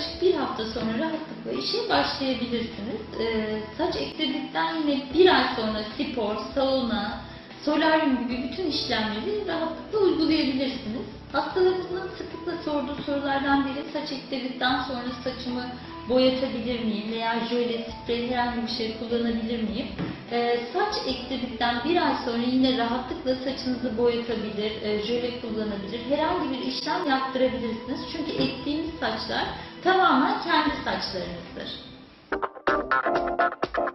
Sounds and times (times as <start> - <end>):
Speech: 0.0 - 31.9
Music: 0.0 - 33.9.